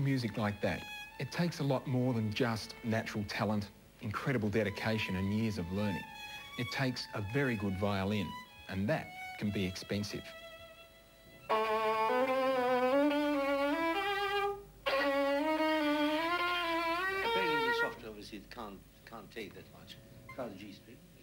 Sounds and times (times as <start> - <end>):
Speech: 0.0 - 10.4, 17.4 - 21.0
Violin, fiddle: 0.0 - 18.1.